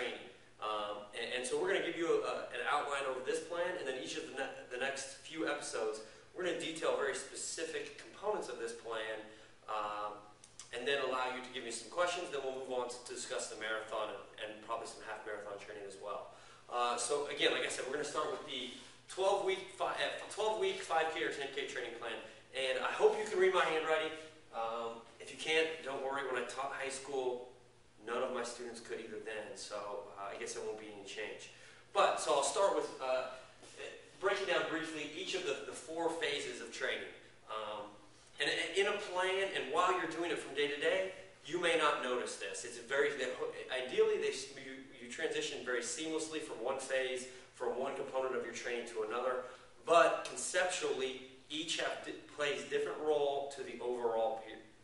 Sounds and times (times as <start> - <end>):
Speech: 0.0 - 54.8.